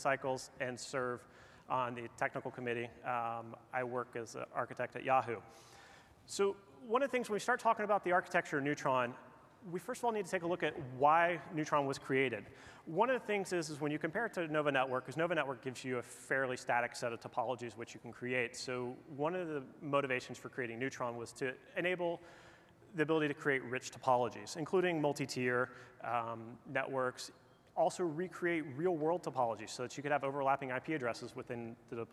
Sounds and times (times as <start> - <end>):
Speech: 0.0 - 5.5, 6.3 - 22.2, 22.9 - 32.1.